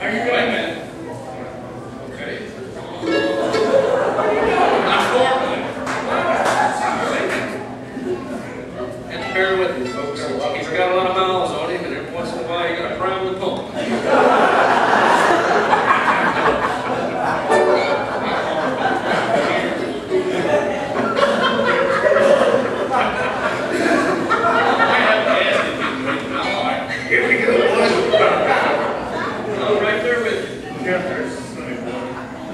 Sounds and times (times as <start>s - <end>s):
Speech: 0.0s - 3.1s, 4.1s - 14.2s, 16.8s - 32.5s.